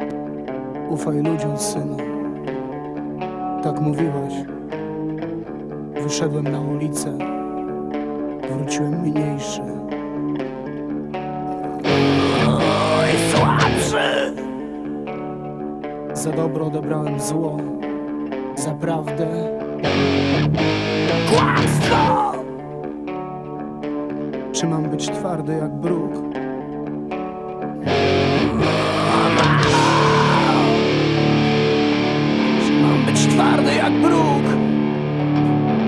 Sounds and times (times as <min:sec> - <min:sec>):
Music: 0:00.0 - 0:35.8
Speech: 0:00.9 - 0:02.1, 0:03.6 - 0:04.5, 0:06.0 - 0:07.3, 0:08.5 - 0:09.8, 0:12.2 - 0:14.4, 0:16.2 - 0:17.8, 0:18.6 - 0:19.6, 0:21.3 - 0:22.5, 0:24.6 - 0:26.3, 0:32.6 - 0:34.7.